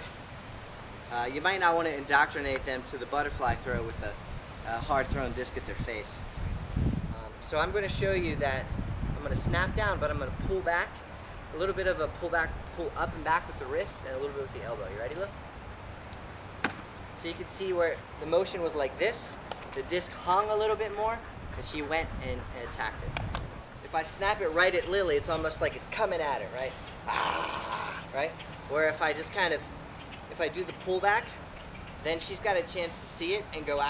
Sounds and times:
Outside, rural or natural: 0.0s - 33.8s
Speech: 1.1s - 6.2s, 7.1s - 11.0s, 11.6s - 15.3s, 17.2s - 23.2s, 23.8s - 29.7s, 30.3s - 31.4s, 32.0s - 33.8s.

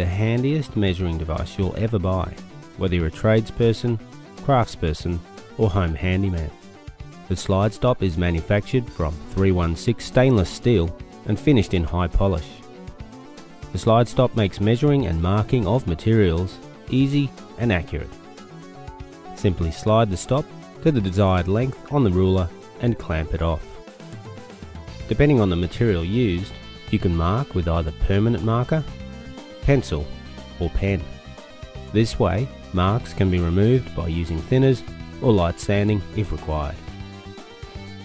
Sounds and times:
Speech: 0.0s - 6.6s, 7.3s - 12.6s, 13.7s - 18.1s, 19.4s - 23.8s, 25.1s - 28.9s, 29.6s - 31.1s, 31.9s - 36.8s
Music: 0.0s - 38.0s.

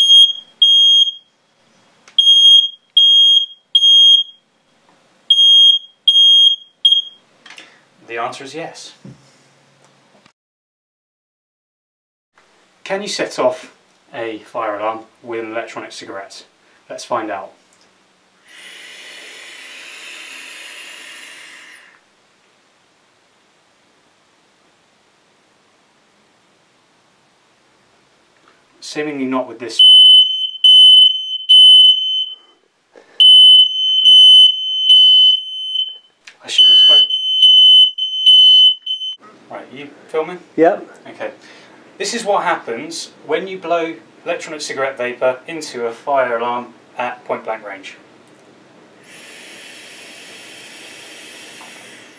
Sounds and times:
Speech: 8.0s - 9.1s, 12.8s - 17.6s, 28.8s - 29.8s, 36.4s - 37.1s, 39.5s - 41.4s, 42.0s - 48.0s.

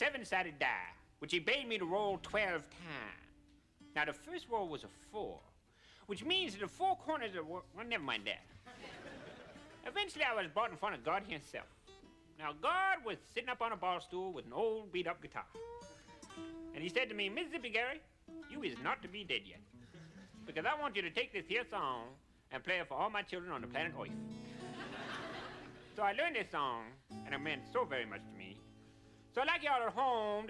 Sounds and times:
Speech: 0.0s - 3.4s, 4.0s - 8.5s, 9.8s - 11.7s, 12.4s - 15.6s, 16.8s - 19.7s, 20.5s - 24.2s, 26.0s - 28.6s, 29.3s - 30.5s.

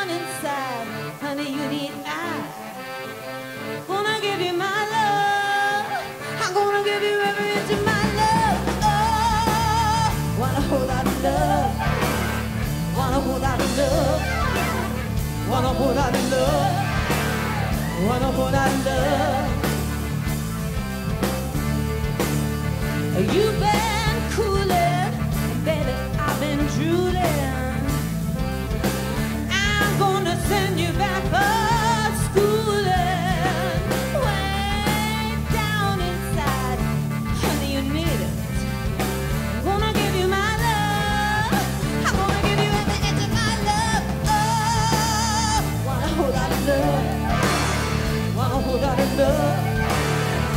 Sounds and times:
Music: 0.0s - 50.5s.

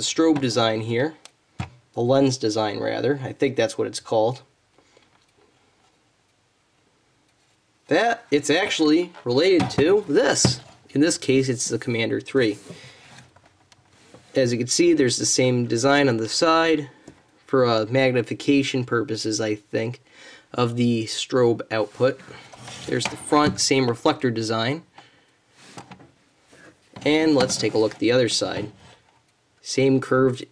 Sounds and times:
Speech: 0.0s - 1.2s, 2.0s - 4.5s, 7.9s - 12.7s, 14.3s - 24.9s, 27.0s - 28.8s, 29.6s - 30.5s.

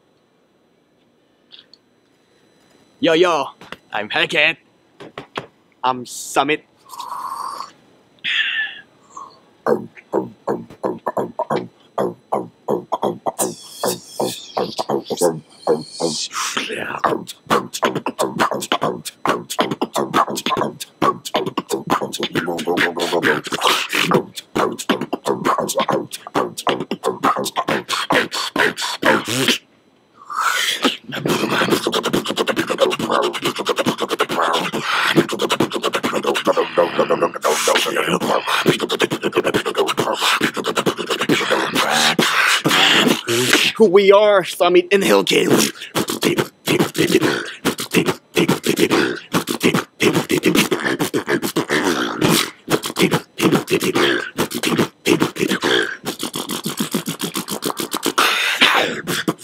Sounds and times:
Beatboxing: 6.8s - 43.8s, 45.2s - 59.4s.

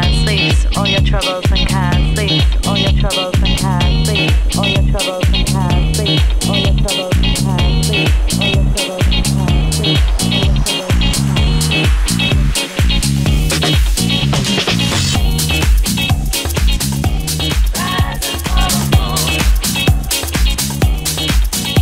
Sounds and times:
House music: 0.0s - 21.8s.

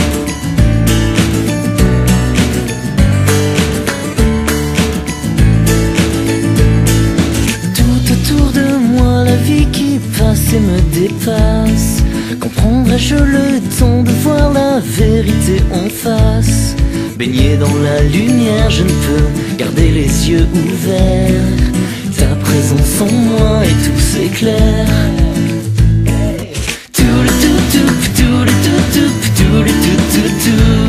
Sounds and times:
Music: 0.0s - 30.8s.

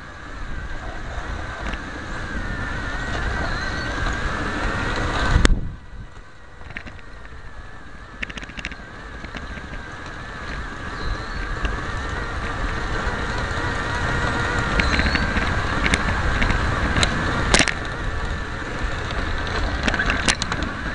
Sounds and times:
Vehicle: 0.0s - 20.9s.

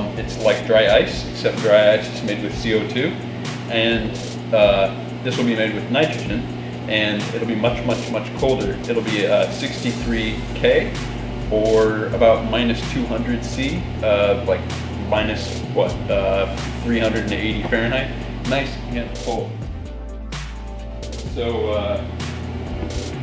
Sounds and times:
Speech: 0.0s - 19.6s, 21.3s - 22.1s
Music: 0.0s - 23.2s.

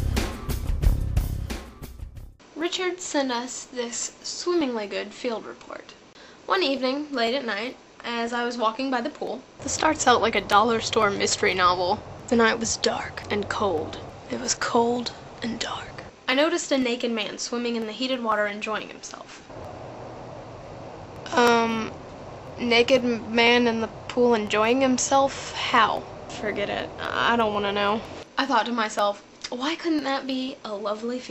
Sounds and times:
Speech: 2.6s - 19.4s, 21.3s - 22.0s, 22.6s - 31.3s.

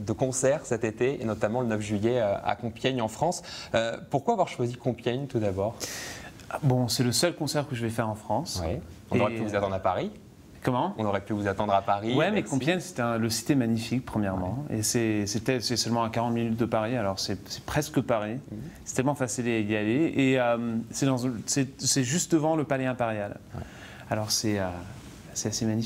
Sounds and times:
Speech: 0.0s - 5.8s, 6.5s - 23.4s, 24.1s - 25.8s.

